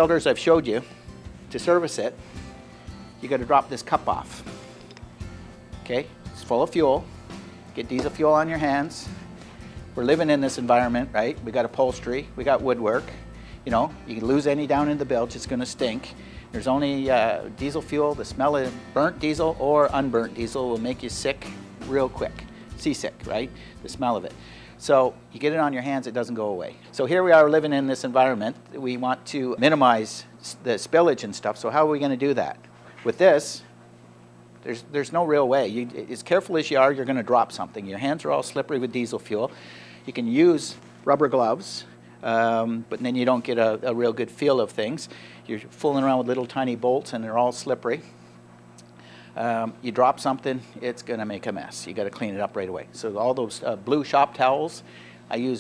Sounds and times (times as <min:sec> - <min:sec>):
Speech: 0:00.0 - 0:00.9, 0:01.5 - 0:02.2, 0:03.2 - 0:04.4, 0:05.8 - 0:07.0, 0:07.8 - 0:09.1, 0:10.0 - 0:33.7, 0:34.6 - 0:39.5, 0:40.1 - 0:48.0, 0:49.4 - 0:55.6
Music: 0:00.0 - 0:28.3.